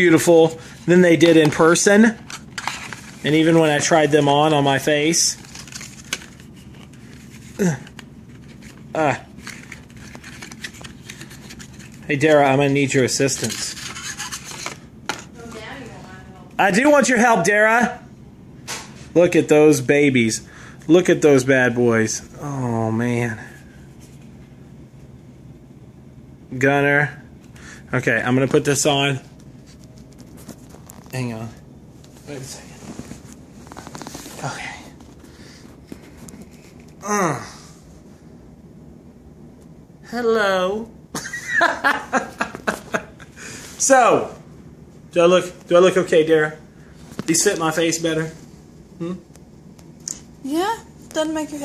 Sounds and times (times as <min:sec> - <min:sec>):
Inside, small room: 0:00.0 - 0:51.6.